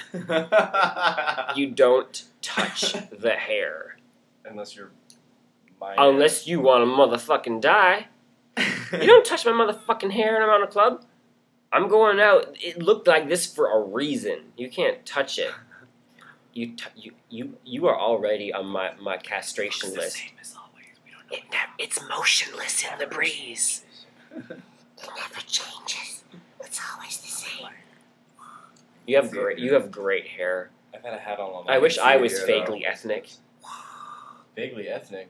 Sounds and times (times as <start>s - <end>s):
Male speech, man speaking: 1.4s - 4.9s, 5.8s - 8.1s, 9.0s - 11.0s, 11.8s - 15.7s, 16.6s - 20.2s, 29.1s - 33.4s, 34.6s - 35.2s.